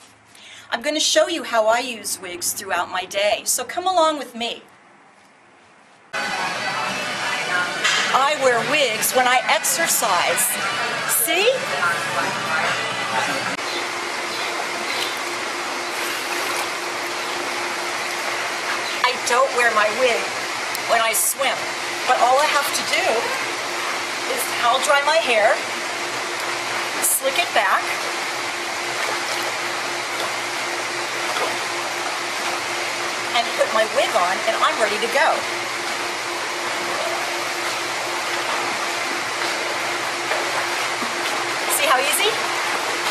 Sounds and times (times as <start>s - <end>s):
Speech: 0.7s - 4.7s, 6.3s - 13.6s, 19.1s - 23.4s, 24.3s - 25.6s, 27.0s - 28.0s, 33.4s - 35.4s, 41.7s - 42.4s.